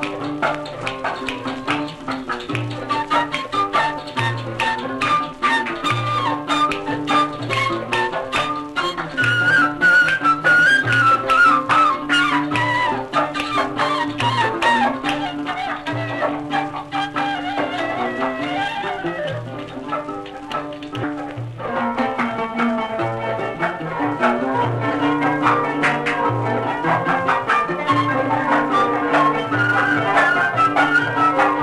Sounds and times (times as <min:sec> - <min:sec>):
Traditional music: 0:00.0 - 0:31.6.